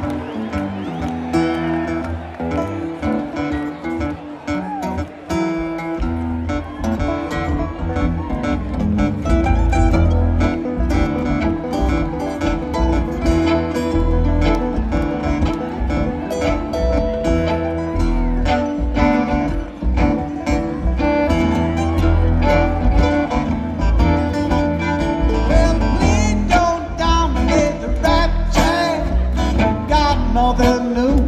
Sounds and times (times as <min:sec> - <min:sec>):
Music: 0:00.0 - 0:31.2.